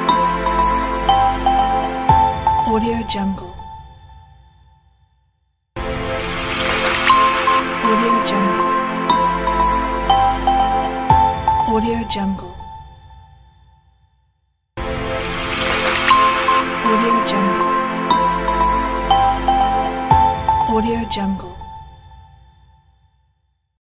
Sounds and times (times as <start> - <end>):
Music: 0.0 - 5.1, 5.8 - 13.9, 14.8 - 23.1
Speech: 2.6 - 3.6, 7.8 - 8.8, 11.6 - 12.6, 16.8 - 17.8, 20.6 - 21.7.